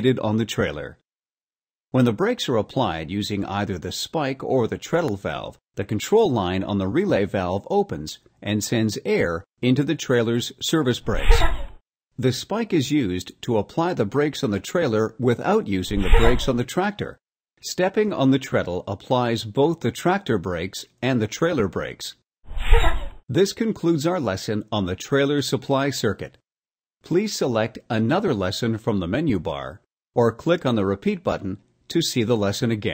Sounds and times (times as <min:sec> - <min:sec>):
Speech: 0:00.0 - 0:01.0, 0:02.0 - 0:11.4, 0:12.2 - 0:22.2, 0:23.3 - 0:26.4, 0:27.0 - 0:32.9.